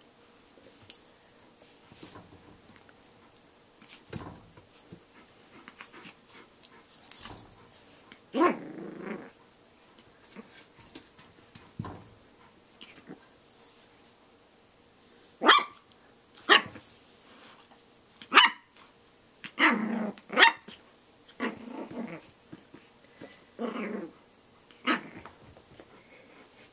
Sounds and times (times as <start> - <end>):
Inside, small room: 0.0 - 26.7.